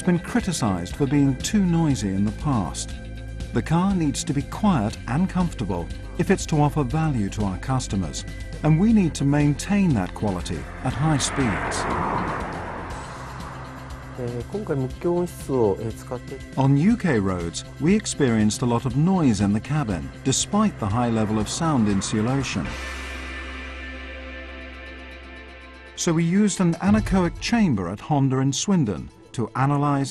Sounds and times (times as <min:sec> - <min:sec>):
Speech: 0:00.0 - 0:02.9, 0:03.6 - 0:11.9, 0:14.2 - 0:22.8, 0:26.0 - 0:30.1
Music: 0:00.0 - 0:30.1.